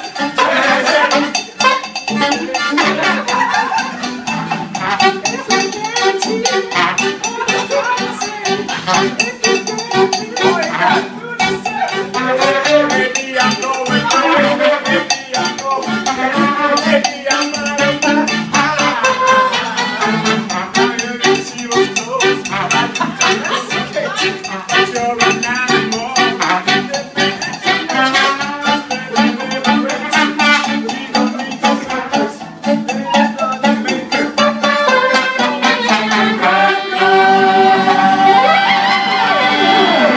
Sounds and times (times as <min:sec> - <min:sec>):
Funny music: 0:00.0 - 0:40.1.